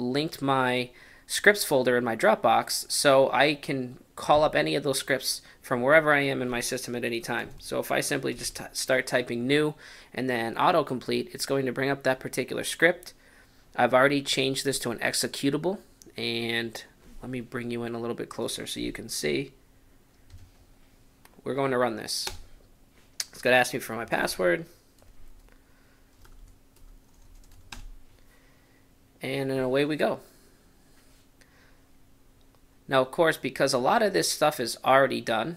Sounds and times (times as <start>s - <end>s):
Speech: 0.0s - 13.2s, 13.8s - 19.6s, 21.4s - 22.4s, 23.2s - 24.7s, 29.2s - 30.3s, 32.9s - 35.5s
Computer keyboard: 26.1s - 28.0s.